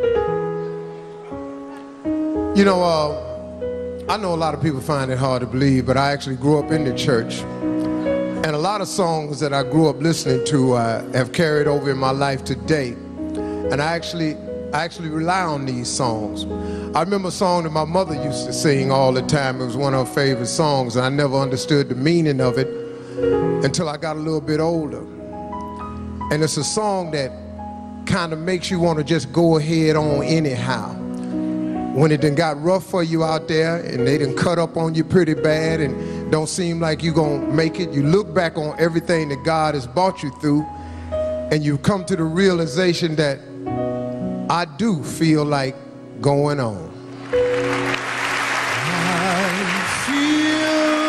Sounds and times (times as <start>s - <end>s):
Music: 0.0s - 51.0s
Speech: 4.1s - 7.4s, 8.4s - 13.0s, 13.7s - 16.4s, 17.0s - 22.7s, 23.6s - 25.1s, 26.3s - 27.4s, 28.1s - 31.0s, 32.0s - 40.6s, 41.5s - 43.4s, 44.5s - 46.9s.